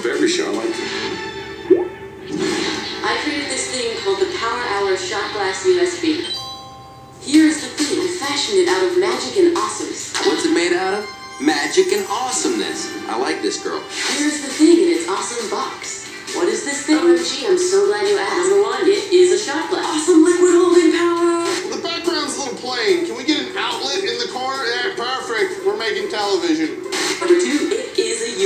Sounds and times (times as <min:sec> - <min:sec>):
Speech: 0:00.0 - 0:00.8, 0:03.0 - 0:06.4, 0:07.2 - 0:28.4
Music: 0:00.0 - 0:28.4.